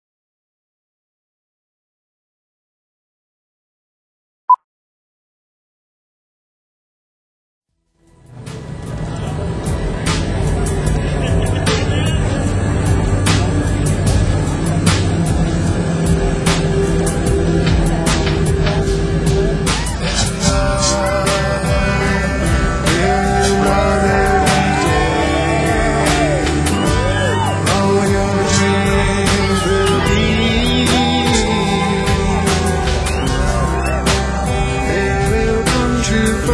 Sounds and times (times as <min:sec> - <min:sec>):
Music: 0:07.7 - 0:36.5.